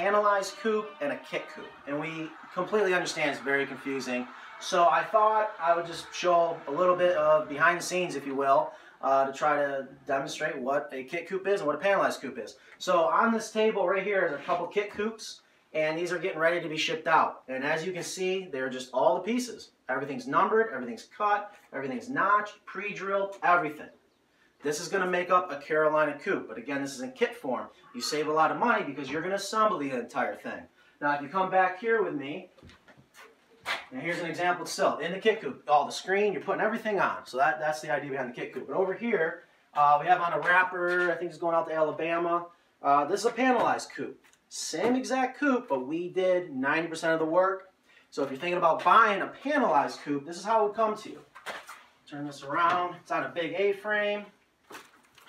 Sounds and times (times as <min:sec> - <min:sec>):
Speech: 0:00.0 - 0:24.0, 0:24.6 - 0:32.6, 0:33.9 - 0:51.2, 0:52.1 - 0:54.4.